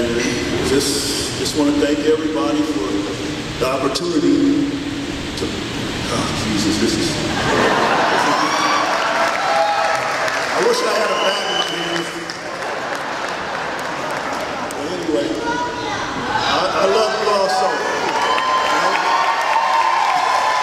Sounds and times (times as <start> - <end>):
Male speech, man speaking: 0.0 - 4.7, 5.4 - 7.2, 10.6 - 12.2, 14.8 - 15.5, 16.5 - 18.0.